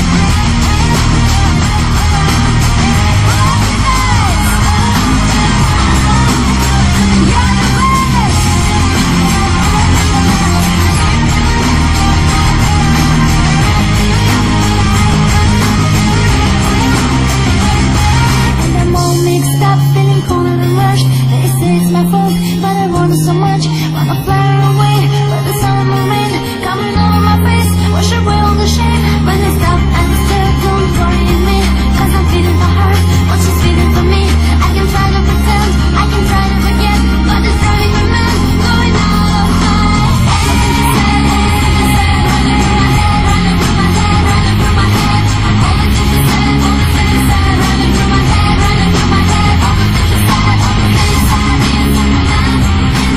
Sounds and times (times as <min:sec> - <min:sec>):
Inside, public space: 0:00.0 - 0:53.1
Music: 0:00.0 - 0:53.1.